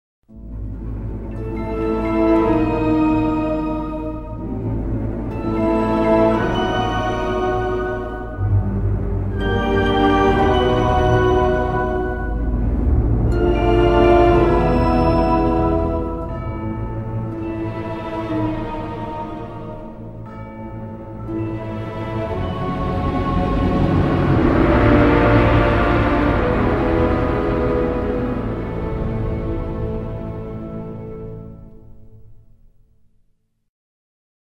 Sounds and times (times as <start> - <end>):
Scary music: 0.3 - 32.8.